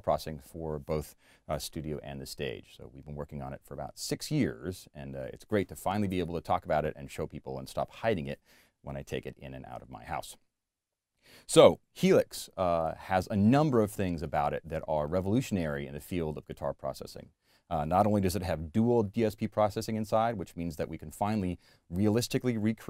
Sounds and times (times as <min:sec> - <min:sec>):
Speech: 0:00.0 - 0:10.4, 0:11.5 - 0:22.8.